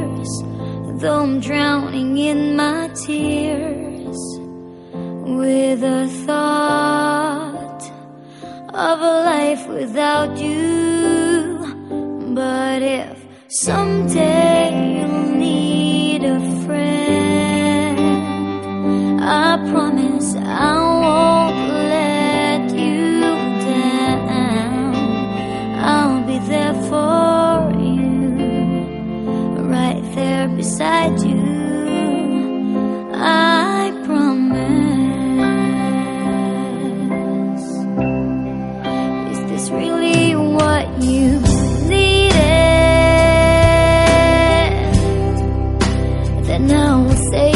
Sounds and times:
Music: 0.0s - 47.5s.

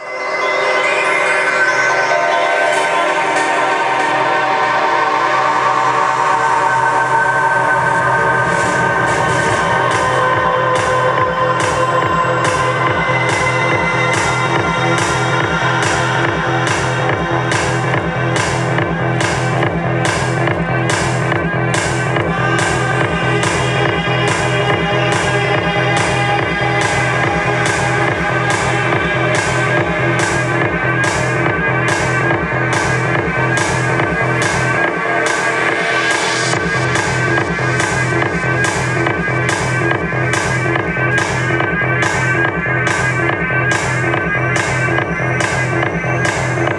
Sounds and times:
Music: 0.0s - 46.7s.

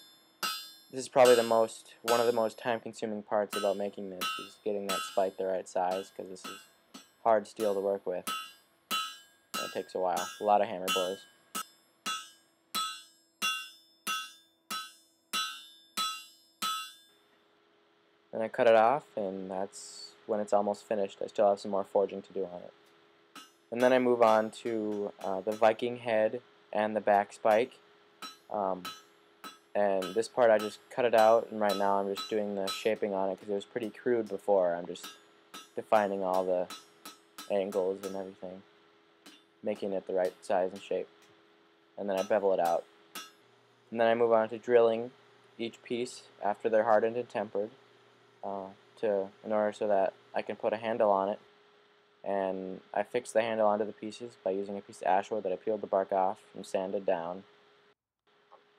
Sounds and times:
Hammer: 0.4s - 2.4s, 3.6s - 5.3s, 5.9s - 17.0s, 23.4s - 25.8s, 27.2s - 34.0s, 35.0s - 38.3s, 42.1s - 43.4s.

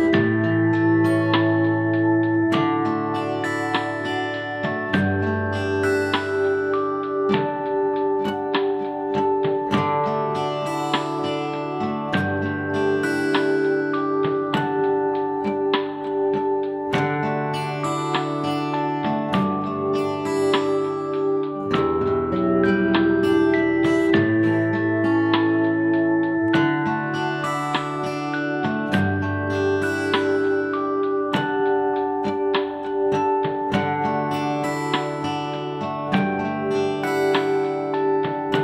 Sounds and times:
Acoustic guitar: 0.0s - 38.6s.

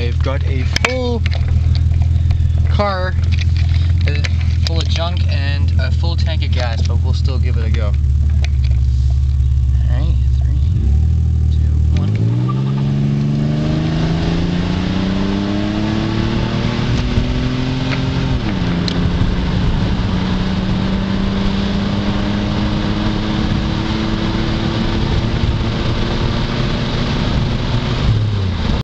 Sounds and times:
Car: 0.0s - 28.8s.

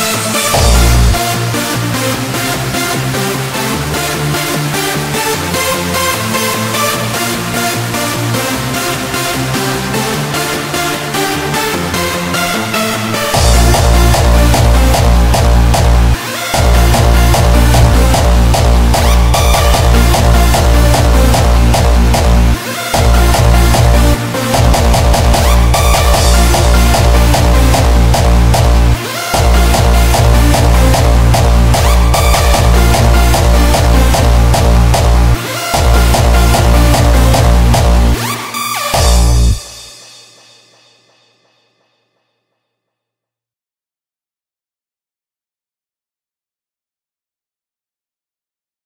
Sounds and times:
Electronic music: 0.0s - 40.7s.

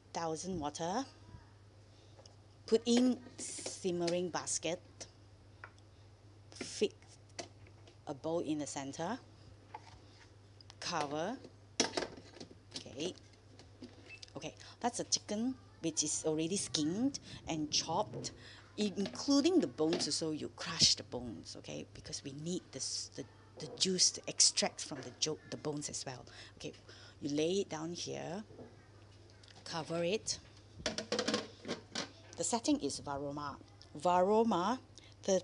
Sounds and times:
Speech: 0.2s - 1.6s, 2.7s - 5.1s, 6.6s - 7.0s, 8.1s - 9.2s, 10.8s - 11.4s, 12.8s - 13.2s, 14.3s - 28.5s, 29.6s - 30.5s, 32.4s - 35.4s.

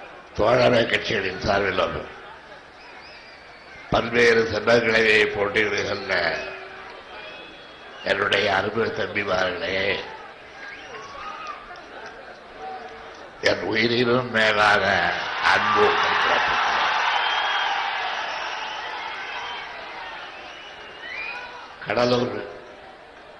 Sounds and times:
Male speech, man speaking: 0.4s - 2.2s, 3.9s - 6.6s, 8.0s - 10.2s, 13.4s - 16.8s, 21.8s - 22.6s
Narration, monologue: 0.4s - 2.2s, 3.9s - 6.6s, 8.0s - 10.2s, 13.0s - 16.7s, 21.8s - 22.8s.

